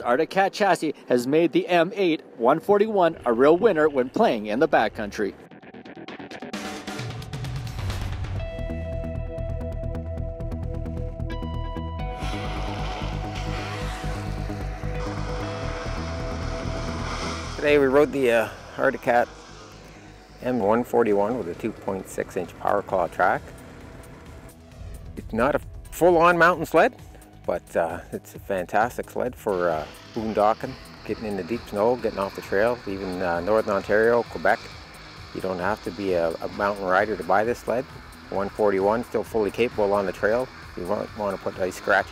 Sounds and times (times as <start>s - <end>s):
Speech: 0.0s - 5.4s, 17.6s - 19.3s, 20.4s - 23.4s, 25.2s - 26.9s, 27.5s - 34.7s, 35.4s - 42.1s
Music: 2.6s - 42.1s.